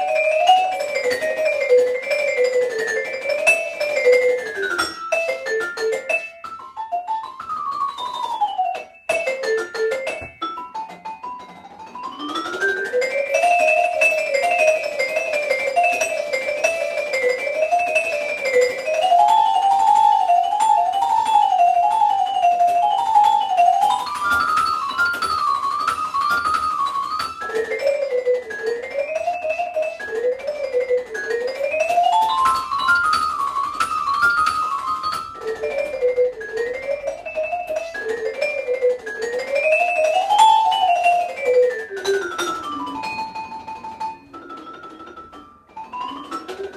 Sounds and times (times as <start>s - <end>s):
Marimba, xylophone: 0.0s - 46.7s
Piano: 0.0s - 46.7s
Vibraphone: 0.0s - 46.7s.